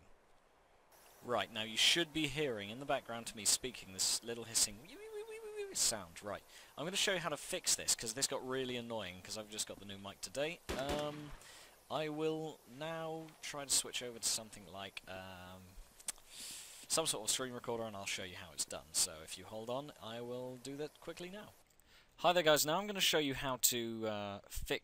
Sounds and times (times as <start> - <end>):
Speech: 1.3 - 15.7, 16.9 - 21.6, 22.2 - 24.8.